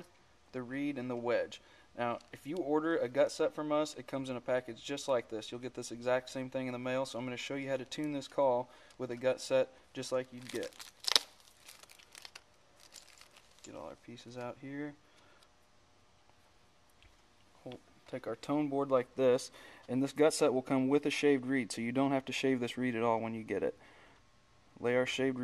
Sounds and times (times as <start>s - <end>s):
Speech: 0.0s - 10.8s, 13.6s - 15.0s, 17.6s - 23.8s, 24.8s - 25.4s.